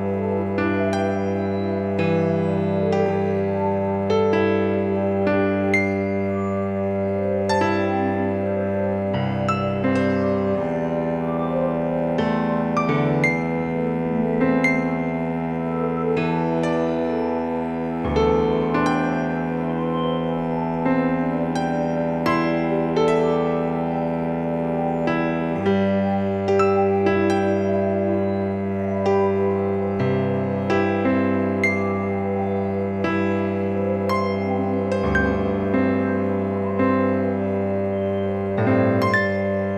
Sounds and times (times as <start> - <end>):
Music: 0.0 - 39.7.